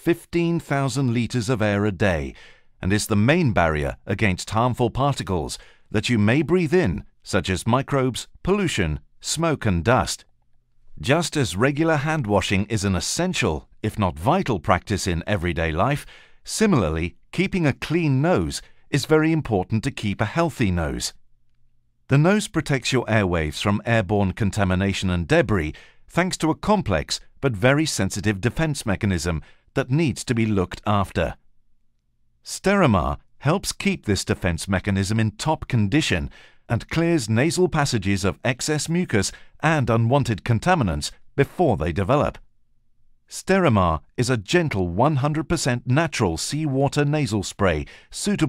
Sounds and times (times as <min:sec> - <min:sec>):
Speech: 0:00.0 - 0:10.3, 0:11.0 - 0:21.2, 0:22.1 - 0:31.4, 0:32.4 - 0:42.4, 0:43.3 - 0:48.4.